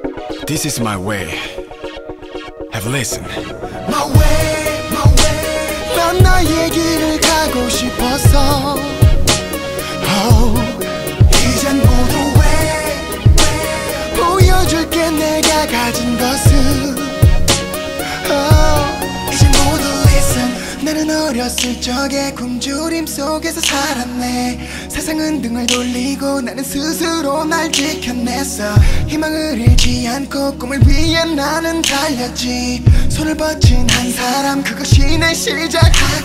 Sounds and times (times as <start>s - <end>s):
Music: 0.0s - 36.2s.